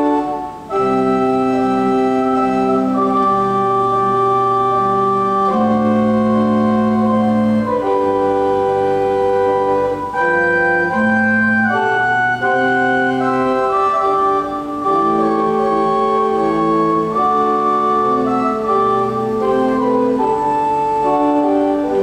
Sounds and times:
Music: 0.0 - 22.0.

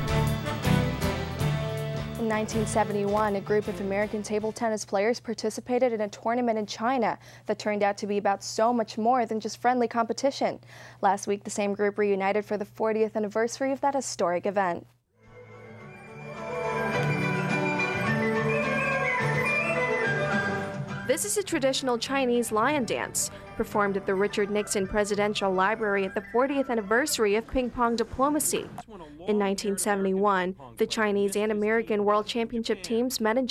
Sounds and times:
Music: 0.0 - 4.6, 15.2 - 28.8
Speech: 2.2 - 14.8, 21.1 - 33.5.

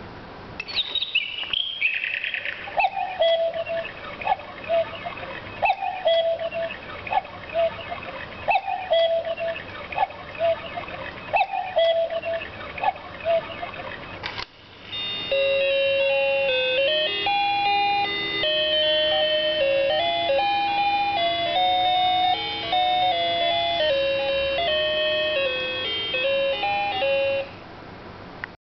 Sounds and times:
Music: 14.9 - 27.6.

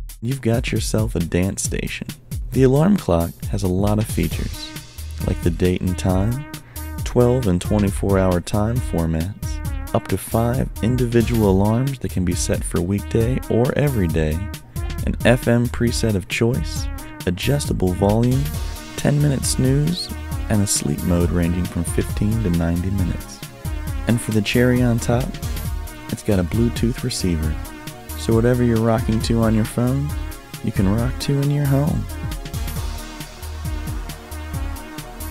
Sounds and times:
Music: 0.0 - 35.3
Speech: 0.2 - 6.4, 7.0 - 23.4, 24.1 - 25.4, 26.1 - 32.1.

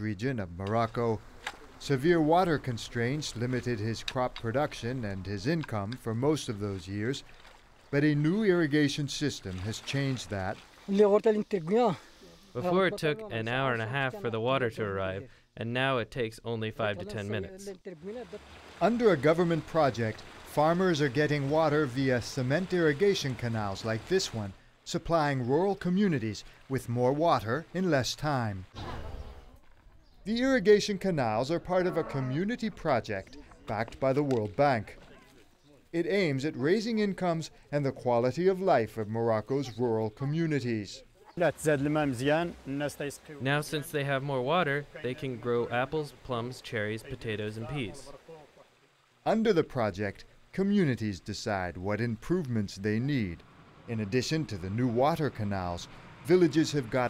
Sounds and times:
Speech: 0.0 - 1.2, 1.8 - 7.2, 8.0 - 12.0, 12.6 - 28.7, 30.3 - 35.3, 36.0 - 48.3, 49.3 - 57.0
Stream: 0.6 - 12.9, 17.1 - 29.4, 30.3 - 57.0.

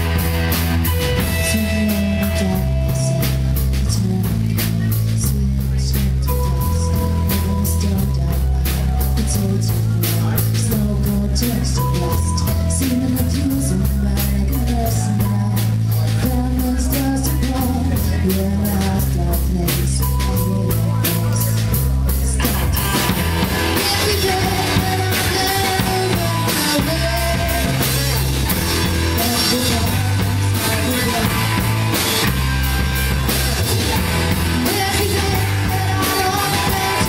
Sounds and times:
Music: 0.0 - 37.0.

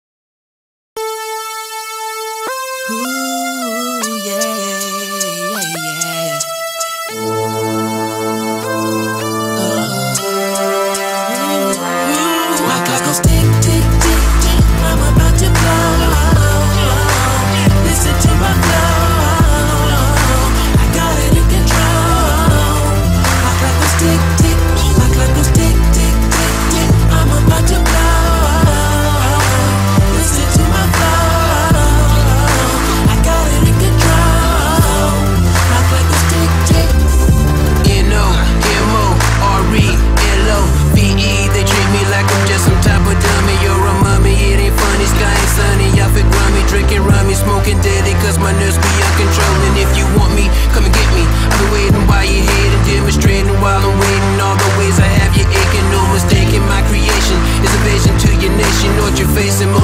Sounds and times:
Music: 1.0 - 59.8.

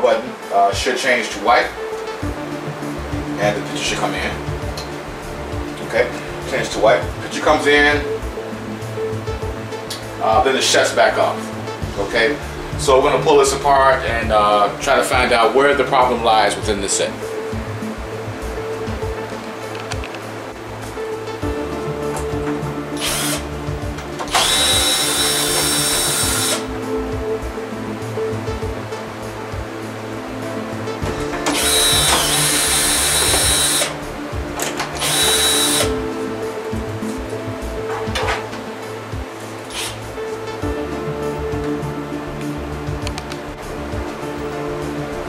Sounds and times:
Music: 0.0 - 45.2.

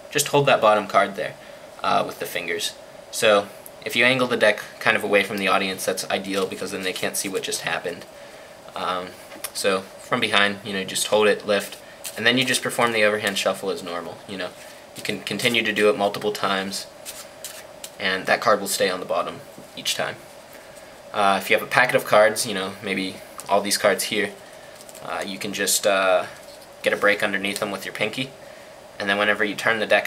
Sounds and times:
Speech: 0.1 - 8.1, 8.7 - 16.9, 18.0 - 20.2, 21.1 - 24.4, 25.0 - 28.4, 29.0 - 30.0.

